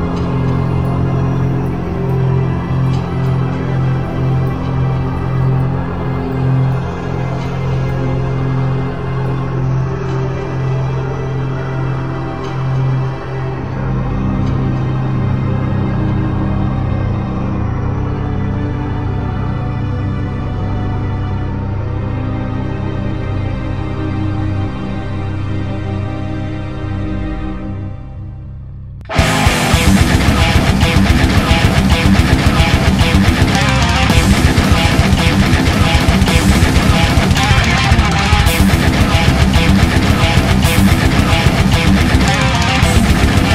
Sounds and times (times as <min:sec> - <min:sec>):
Heavy metal: 0:00.0 - 0:16.9, 0:29.1 - 0:43.5.